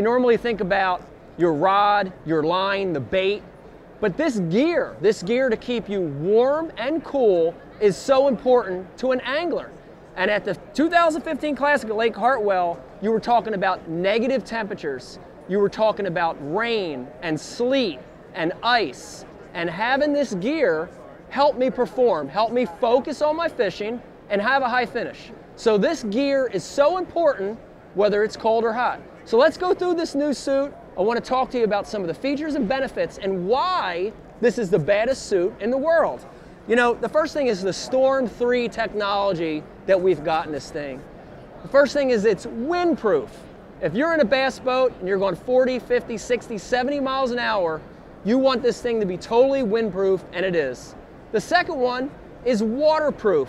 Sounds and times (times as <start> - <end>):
Speech: 0.0 - 53.4.